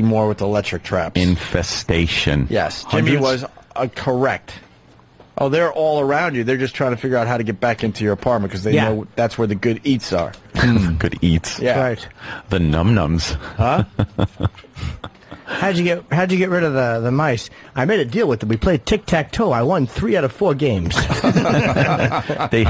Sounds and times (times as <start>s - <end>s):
Speech: 0.0s - 4.6s, 5.4s - 13.9s, 15.6s - 22.7s.